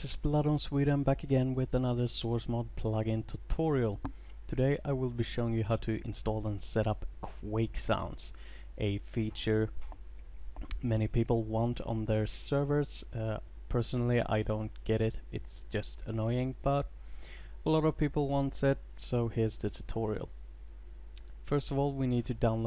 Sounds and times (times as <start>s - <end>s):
Speech: 0.0s - 9.8s, 10.7s - 16.9s, 17.6s - 20.3s, 21.5s - 22.6s.